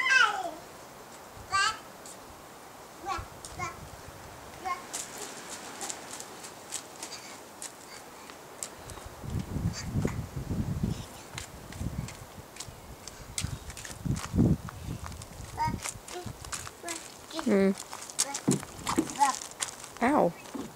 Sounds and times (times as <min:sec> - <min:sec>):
Outside, urban or manmade: 0:00.0 - 0:20.7.